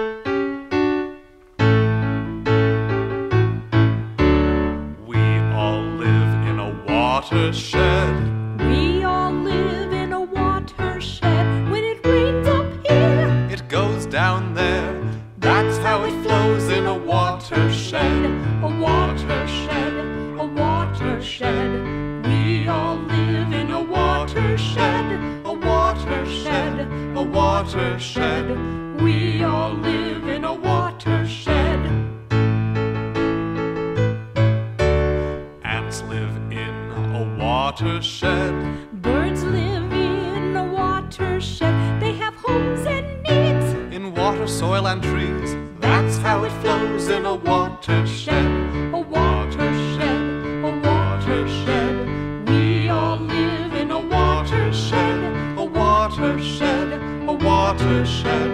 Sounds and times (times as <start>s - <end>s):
Music: 0.0s - 58.5s.